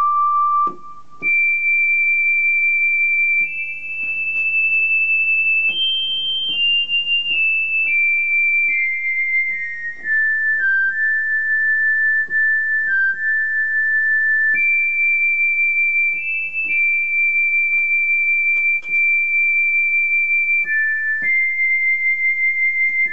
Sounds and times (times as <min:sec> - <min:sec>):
Music: 0:00.0 - 0:23.1.